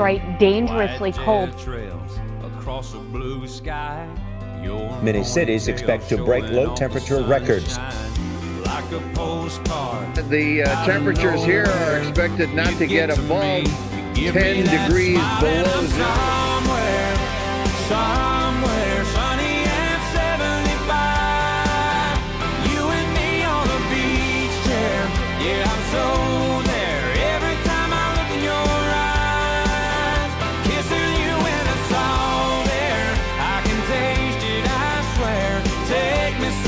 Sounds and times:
Speech: 0.0 - 8.1, 10.0 - 16.2
Music: 0.0 - 36.6.

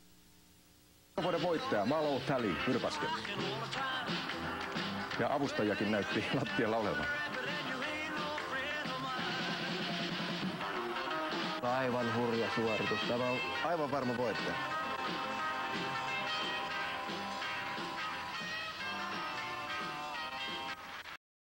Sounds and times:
Speech: 1.2 - 3.2, 5.2 - 7.1, 11.6 - 14.6
Music: 1.2 - 21.2.

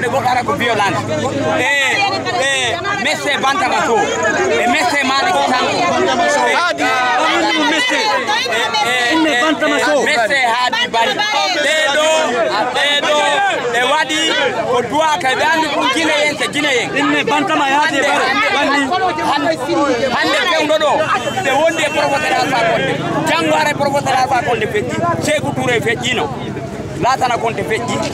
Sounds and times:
Speech: 0.0 - 28.1.

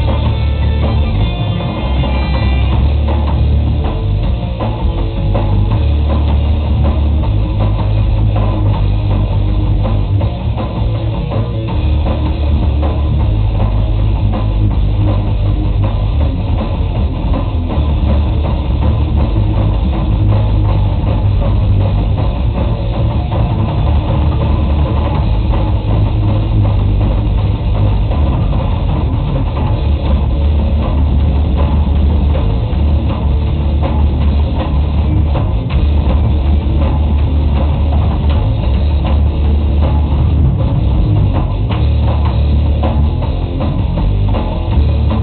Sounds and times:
Drum: 0.0 - 45.2
Drum kit: 0.0 - 45.2.

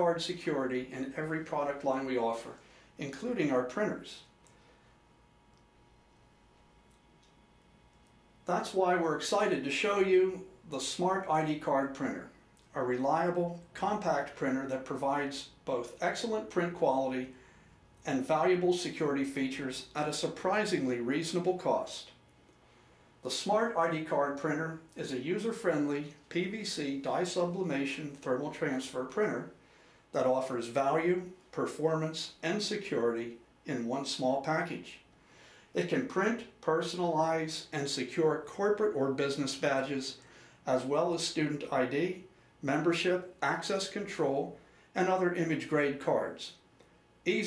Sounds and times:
Speech: 0.0 - 4.3, 8.5 - 17.4, 18.0 - 22.2, 23.2 - 35.1, 35.7 - 46.6, 47.2 - 47.4.

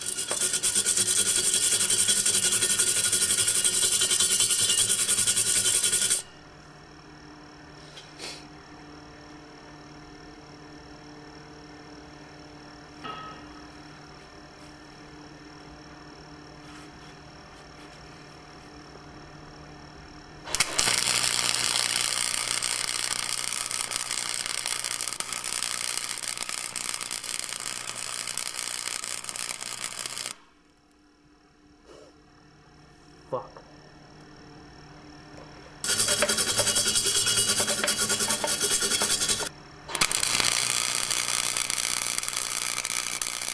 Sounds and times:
Speech: 33.3 - 33.7.

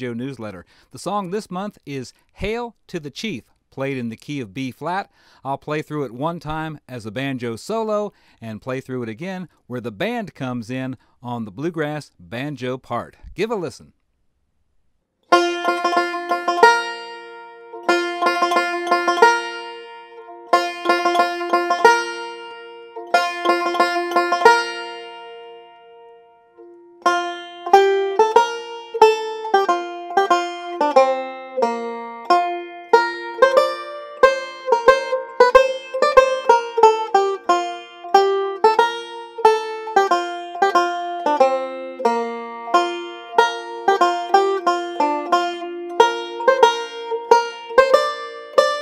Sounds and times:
Mandolin: 15.3 - 48.8.

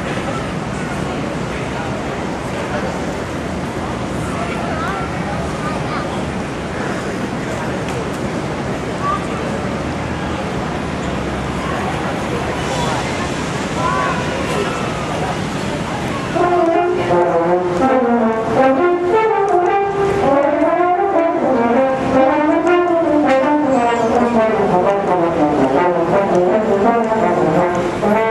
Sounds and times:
French horn: 16.2 - 28.3.

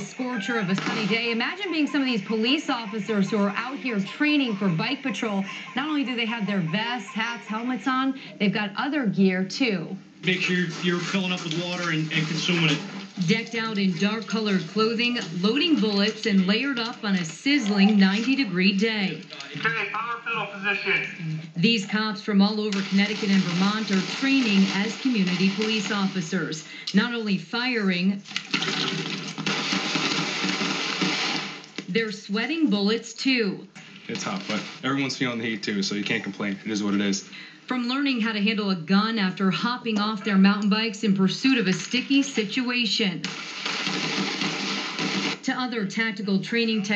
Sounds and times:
Speech: 0.0 - 28.2, 31.9 - 43.2, 45.5 - 46.9.

